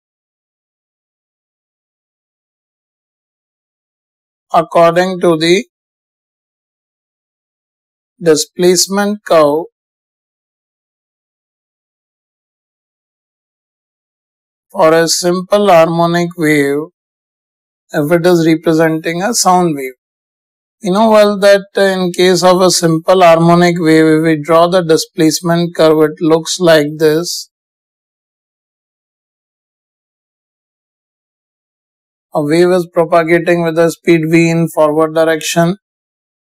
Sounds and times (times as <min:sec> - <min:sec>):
Speech: 0:04.5 - 0:05.7, 0:08.2 - 0:09.7, 0:14.8 - 0:16.9, 0:18.0 - 0:20.0, 0:20.8 - 0:27.5, 0:32.4 - 0:35.8.